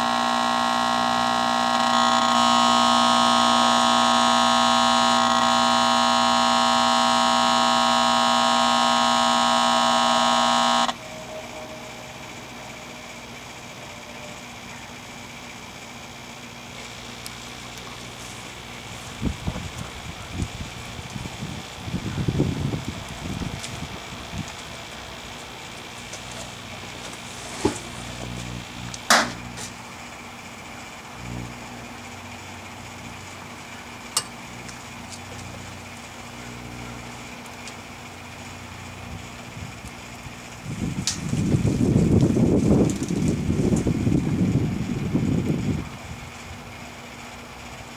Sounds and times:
Microwave oven: 0:00.0 - 0:47.9.

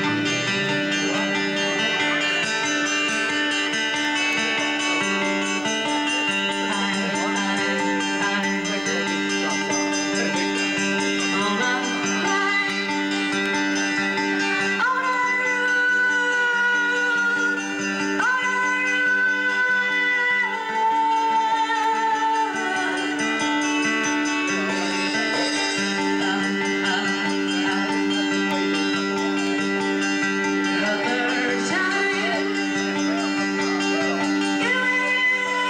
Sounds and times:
Music: 0:00.0 - 0:35.7.

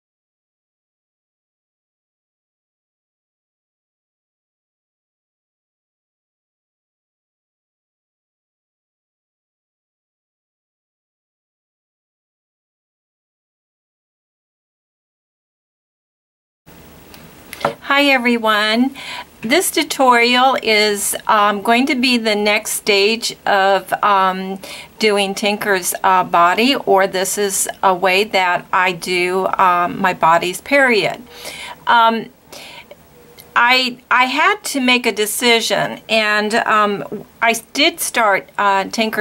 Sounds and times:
Speech: 0:17.8 - 0:31.3, 0:31.9 - 0:32.3, 0:33.6 - 0:39.2.

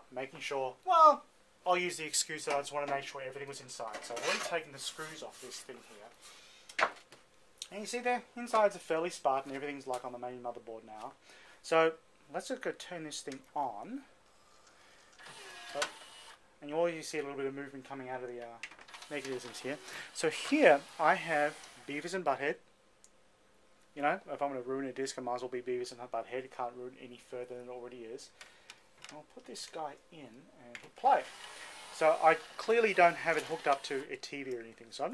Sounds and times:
Speech: 0:00.0 - 0:06.2, 0:07.6 - 0:14.1, 0:16.6 - 0:22.6, 0:24.0 - 0:28.3, 0:29.1 - 0:31.3, 0:32.0 - 0:35.1.

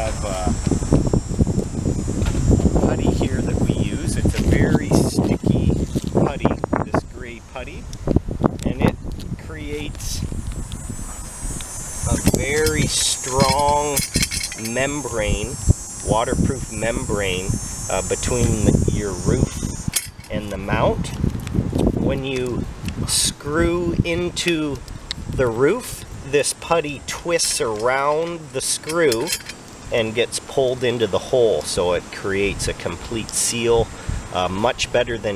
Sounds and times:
Speech: 0:00.0 - 0:00.6, 0:02.8 - 0:07.8, 0:08.6 - 0:10.2, 0:12.1 - 0:19.6, 0:20.3 - 0:21.2, 0:22.0 - 0:24.8, 0:25.4 - 0:35.3.

